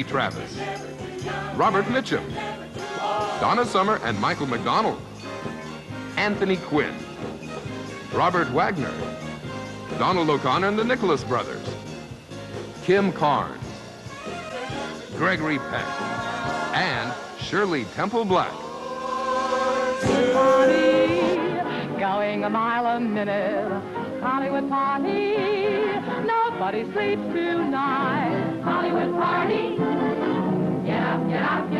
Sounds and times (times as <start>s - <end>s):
Music: 0.0s - 31.7s
Speech: 16.8s - 18.6s.